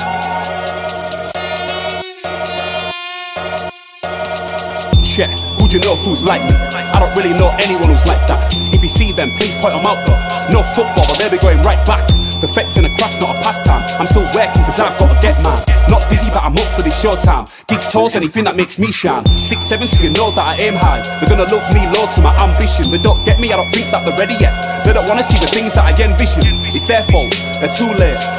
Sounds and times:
Rapping: 5.0s - 28.3s.

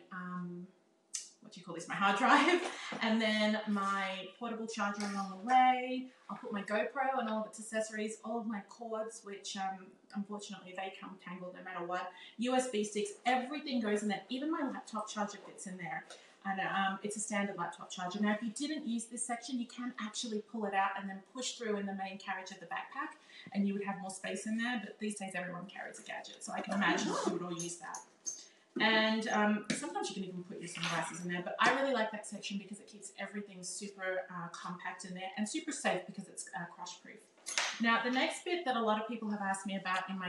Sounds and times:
Inside, small room: 0.0s - 40.2s
Speech: 0.0s - 40.2s.

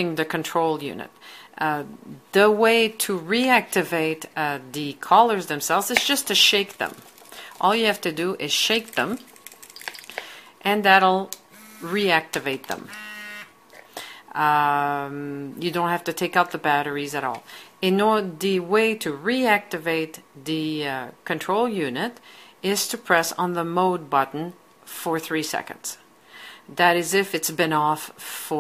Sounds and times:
Speech: 0.0s - 7.0s, 7.6s - 9.3s, 10.6s - 12.9s, 14.3s - 26.0s, 26.7s - 28.6s.

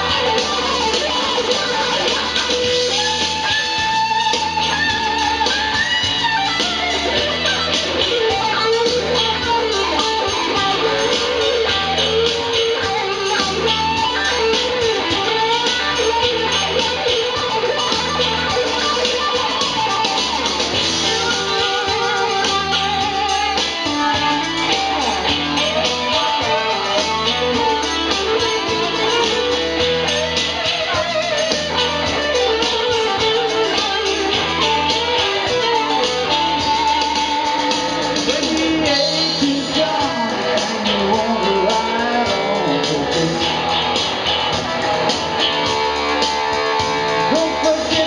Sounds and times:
Electric guitar: 0.0s - 48.0s.

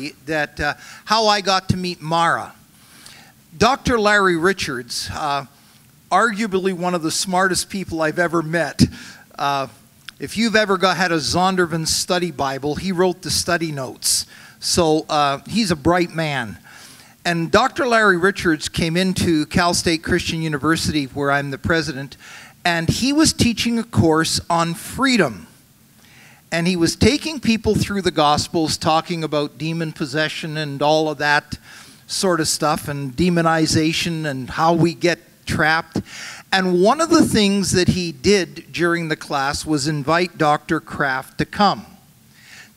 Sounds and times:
Speech: 0.0s - 2.6s, 3.6s - 5.5s, 6.1s - 16.6s, 17.2s - 25.5s, 26.5s - 42.0s.

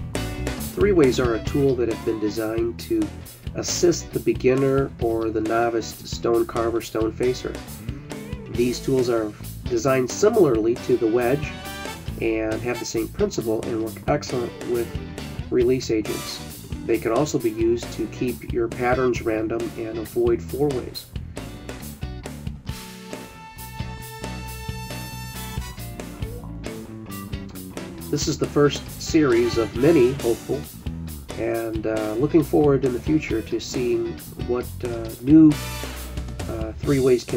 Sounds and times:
Music: 0.0s - 37.3s
Speech: 0.7s - 7.6s, 8.5s - 11.5s, 12.2s - 21.1s, 28.1s - 30.7s, 31.4s - 35.6s, 36.4s - 37.3s.

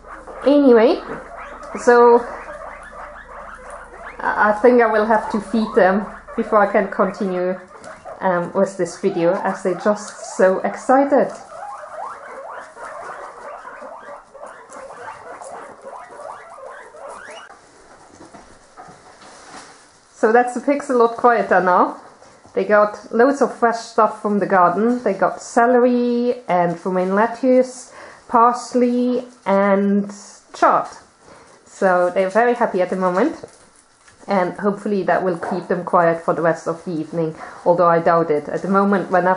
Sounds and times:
Pig: 0.0s - 19.1s
Domestic animals, pets: 0.0s - 19.2s
Speech: 0.5s - 1.2s, 1.8s - 2.3s, 4.2s - 11.4s, 20.2s - 22.0s, 22.6s - 31.0s, 31.7s - 33.5s, 34.3s - 39.3s.

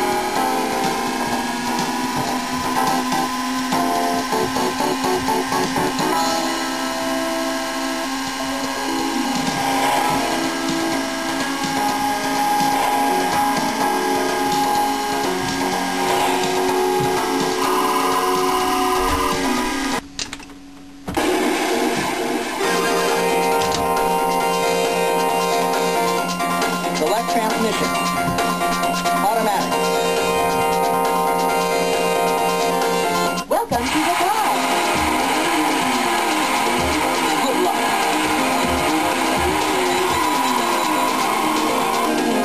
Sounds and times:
Music: 0.0s - 42.4s.

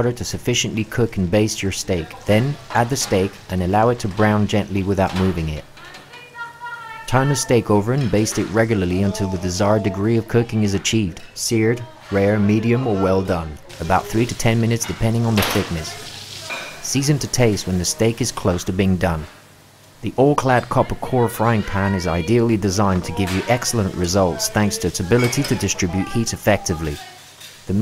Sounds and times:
Speech: 0.0s - 19.3s, 20.0s - 27.8s
Frying (food): 0.0s - 27.8s.

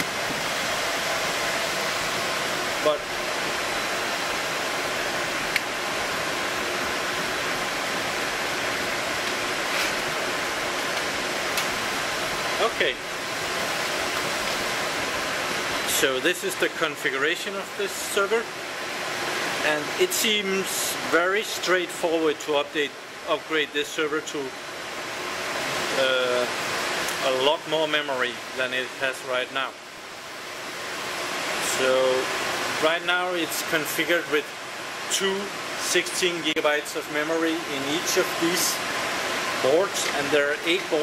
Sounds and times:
Speech: 2.8s - 3.0s, 12.6s - 13.0s, 15.9s - 18.5s, 19.6s - 24.5s, 25.9s - 26.5s, 27.2s - 29.8s, 31.6s - 34.5s, 35.1s - 38.8s, 39.6s - 41.0s.

